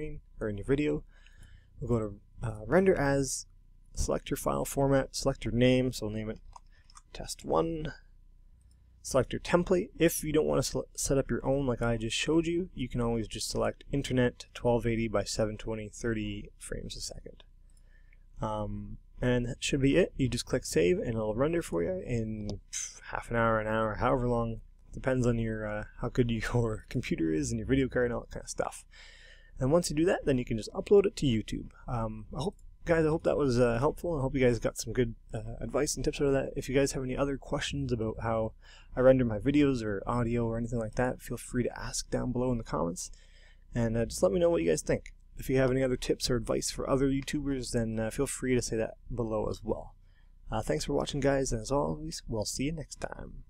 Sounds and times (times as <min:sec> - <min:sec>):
Speech: 0:00.0 - 0:01.1, 0:01.8 - 0:06.4, 0:07.0 - 0:08.1, 0:09.0 - 0:17.5, 0:18.4 - 0:29.0, 0:29.6 - 0:53.5.